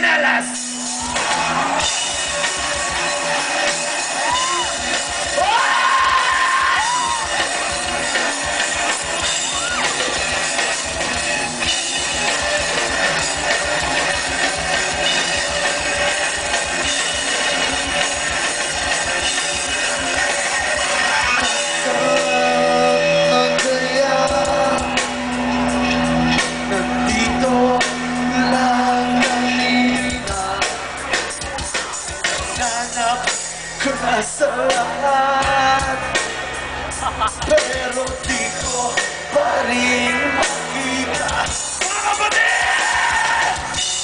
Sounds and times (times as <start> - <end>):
Music: 0.0 - 44.0.